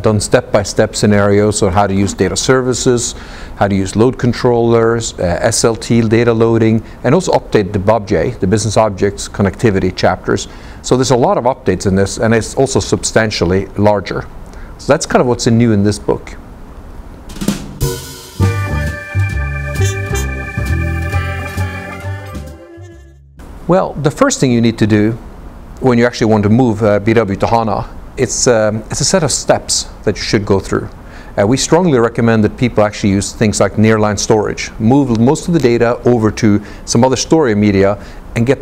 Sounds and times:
Speech: 0.0s - 16.4s, 23.7s - 25.2s, 25.8s - 38.6s.

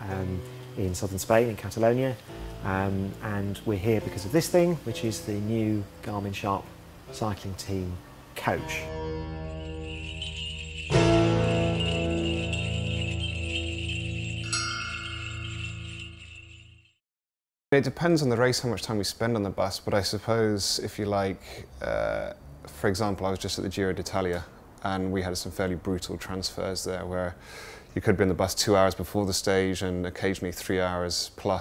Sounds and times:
Speech: 0.0s - 8.9s, 17.8s - 27.4s, 28.0s - 31.6s.

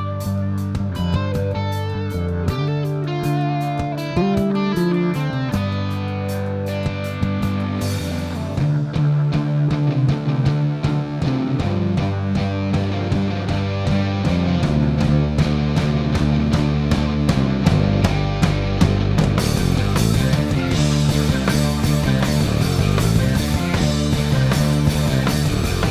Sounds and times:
Music: 0.0s - 25.9s.

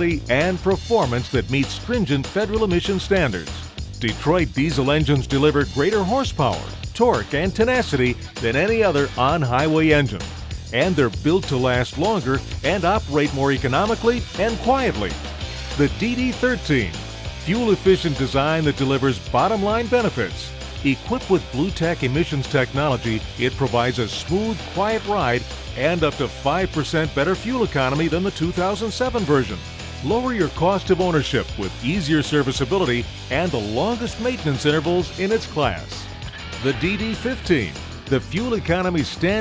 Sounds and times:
Speech: 0.0s - 15.2s, 15.8s - 36.0s, 36.6s - 39.4s
Music: 0.0s - 39.4s.

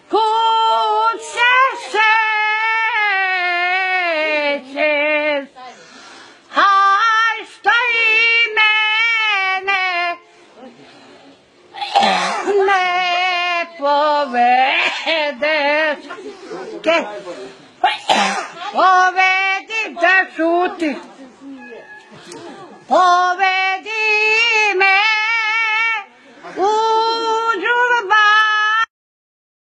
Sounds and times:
Singing: 0.0s - 5.7s, 6.5s - 10.3s, 12.0s - 17.0s, 18.1s - 28.9s
Speech: 18.3s - 23.1s.

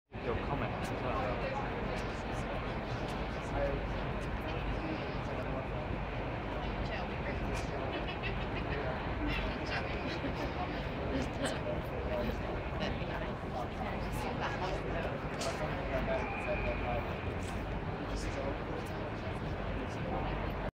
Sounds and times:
Speech: 0.2s - 20.7s.

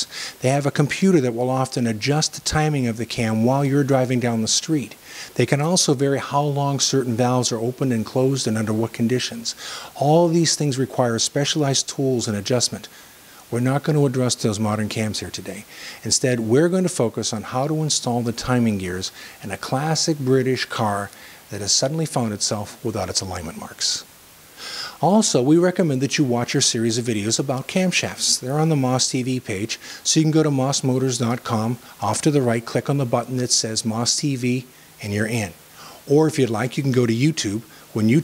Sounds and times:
Speech: 0.0s - 12.9s, 13.5s - 24.1s, 25.0s - 38.2s.

